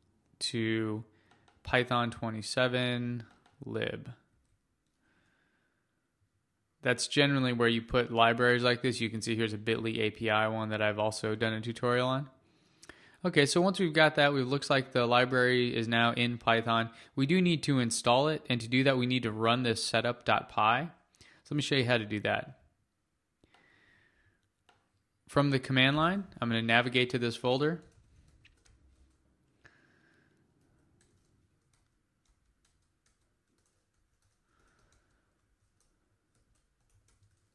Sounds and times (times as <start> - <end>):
Speech: 0.4 - 1.1, 1.7 - 4.2, 6.8 - 12.4, 13.2 - 22.6, 25.3 - 27.9.